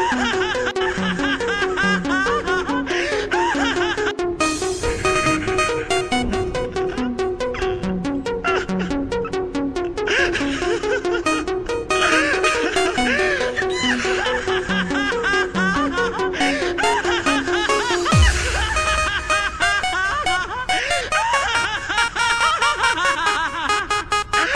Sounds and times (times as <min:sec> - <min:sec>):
Music: 0:00.0 - 0:24.5
Baby laughter: 0:12.0 - 0:18.7.